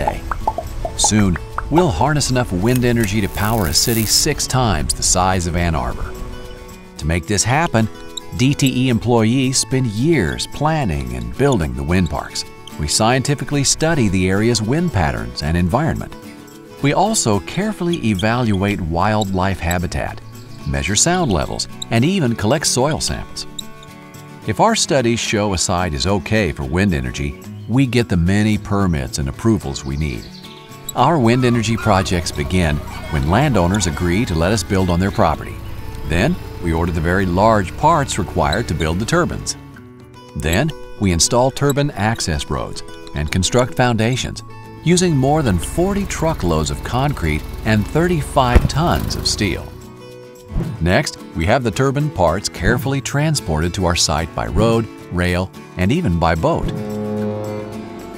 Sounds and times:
Speech: 0.0 - 0.2, 1.0 - 6.1, 7.0 - 16.2, 16.8 - 23.5, 24.5 - 30.3, 31.0 - 39.6, 40.4 - 49.8, 50.8 - 56.8
Music: 0.0 - 58.1.

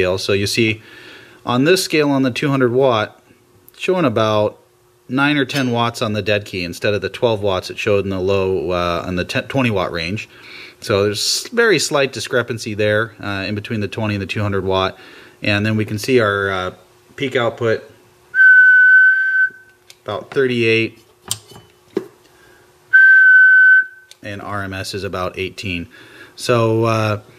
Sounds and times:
Whistling: 18.3 - 19.8, 22.9 - 24.2.

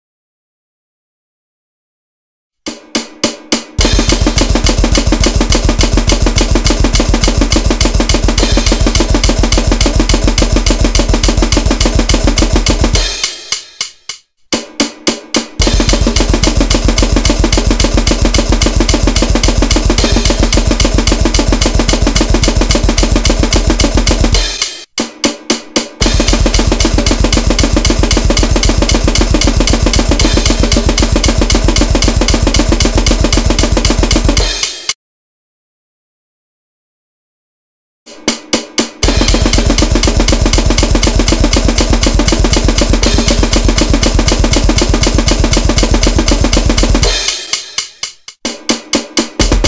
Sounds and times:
Music: 2.6 - 35.0, 38.1 - 49.6.

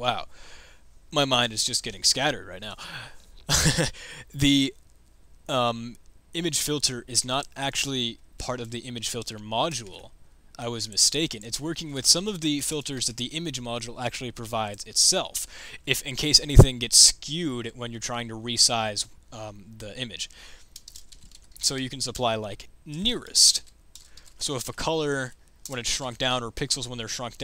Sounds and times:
Speech: 0.0 - 0.3, 1.1 - 2.8, 3.6 - 4.8, 5.5 - 20.4, 21.6 - 23.7, 24.4 - 27.4
Computer keyboard: 20.6 - 21.7, 23.6 - 24.4.

